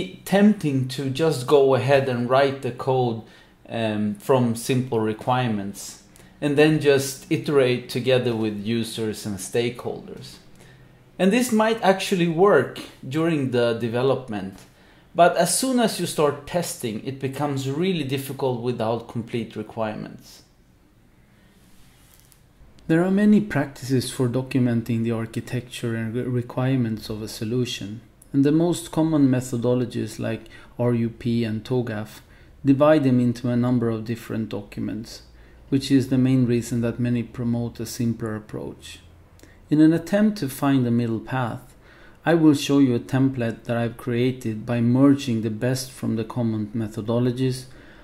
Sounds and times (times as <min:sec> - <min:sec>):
Speech: 0:00.0 - 0:10.5, 0:11.2 - 0:20.5, 0:22.9 - 0:39.1, 0:39.7 - 0:47.7.